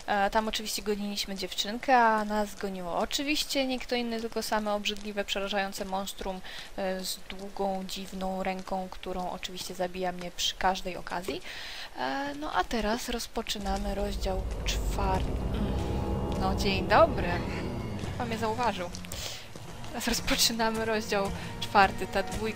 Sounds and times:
Speech: 0.0s - 15.4s, 16.4s - 22.5s
Music: 13.7s - 22.5s.

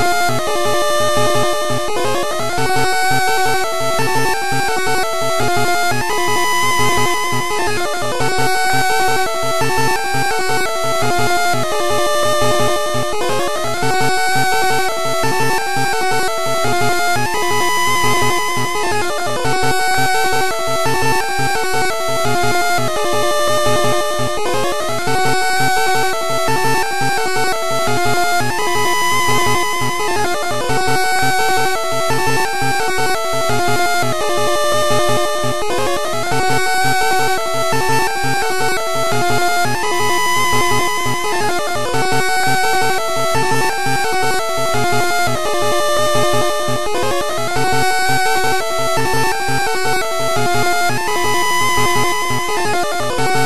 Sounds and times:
Video game music: 0.0s - 53.4s.

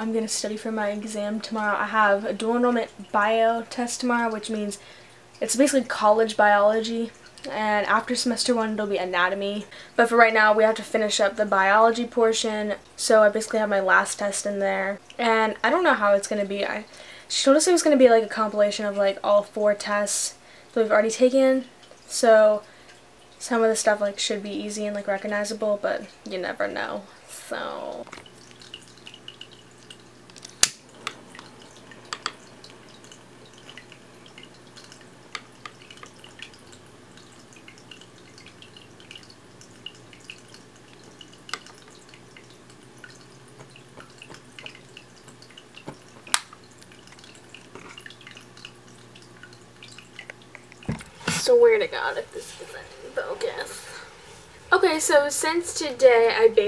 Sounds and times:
Water: 0.0s - 56.6s.

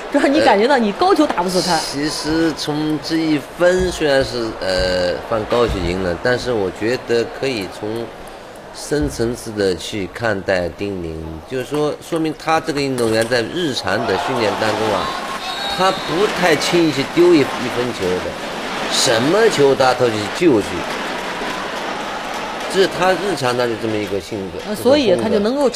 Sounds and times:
Speech: 0.2s - 8.1s, 22.7s - 25.7s.

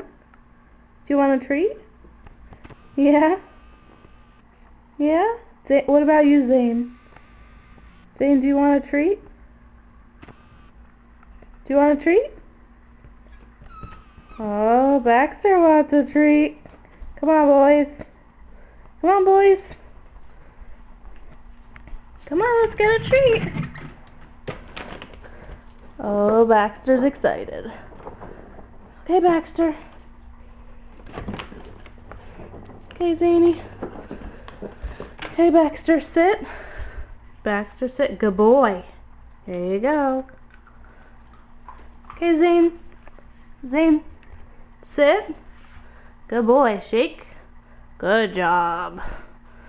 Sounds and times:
Speech: 1.1s - 1.9s, 3.0s - 3.5s, 5.0s - 7.0s, 8.2s - 9.3s, 11.7s - 12.4s, 14.4s - 16.6s, 17.2s - 18.1s, 19.0s - 19.8s, 22.2s - 23.6s, 26.0s - 27.9s, 29.0s - 29.9s, 33.0s - 33.7s, 35.4s - 36.5s, 37.4s - 40.4s, 42.2s - 42.8s, 43.6s - 44.1s, 44.9s - 45.4s, 46.3s - 47.4s, 48.0s - 49.0s
Dog: 12.8s - 14.6s.

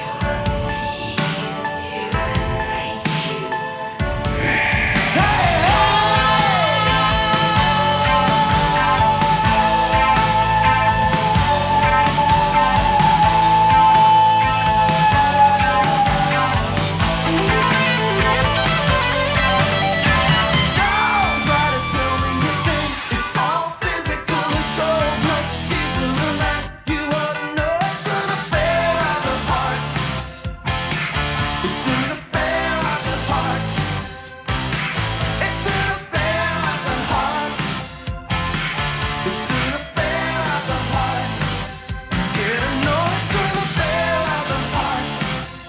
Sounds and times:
Progressive rock: 0.0s - 45.6s
Psychedelic rock: 0.0s - 45.6s.

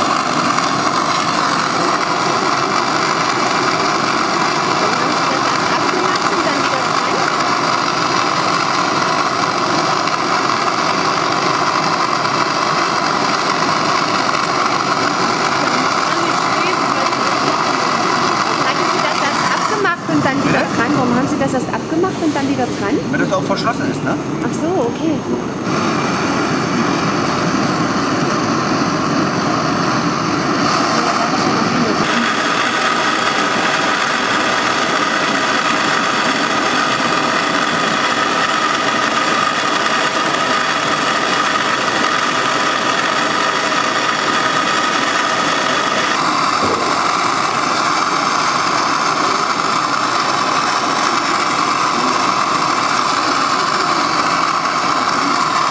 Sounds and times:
Speech: 4.8s - 7.3s, 15.7s - 25.4s.

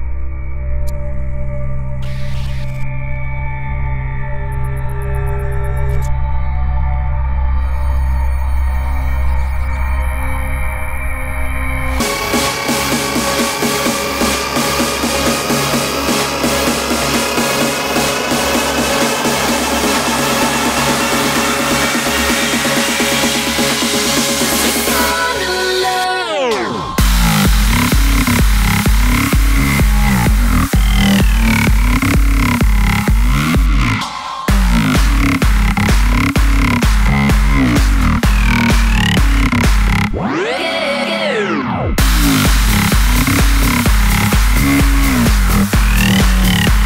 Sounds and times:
Music: 0.0s - 46.8s.

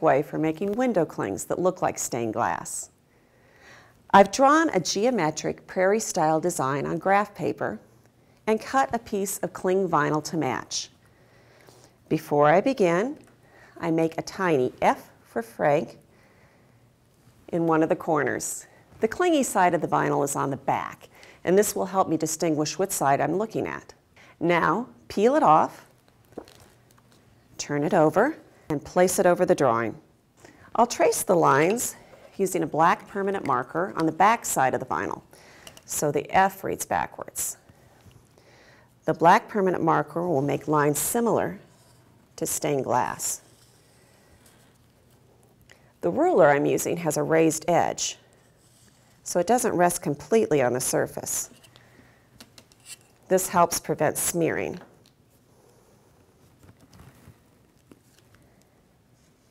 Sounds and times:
Speech: 0.0s - 2.9s, 4.1s - 7.8s, 8.5s - 10.9s, 12.1s - 13.2s, 13.8s - 16.0s, 17.5s - 25.9s, 27.6s - 30.0s, 30.8s - 35.2s, 35.9s - 37.6s, 39.1s - 41.6s, 42.4s - 43.4s, 46.0s - 48.2s, 49.3s - 51.6s, 53.3s - 54.8s.

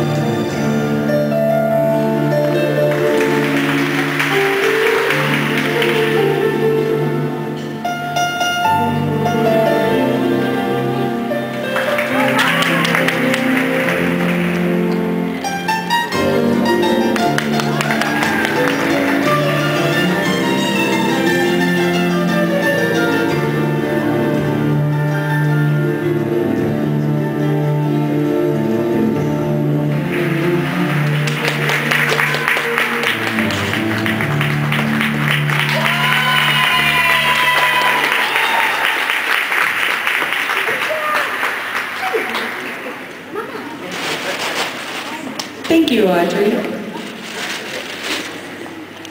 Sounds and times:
Applause: 2.5s - 6.6s, 11.6s - 15.0s, 17.0s - 20.6s, 29.9s - 43.3s
Speech: 45.0s - 47.4s.

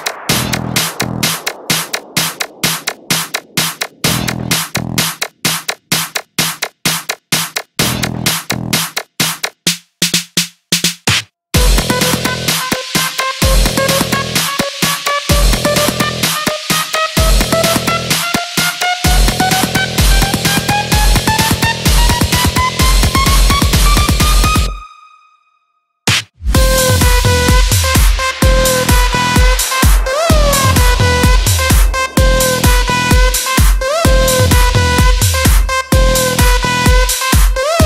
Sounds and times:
Music: 0.0s - 37.8s.

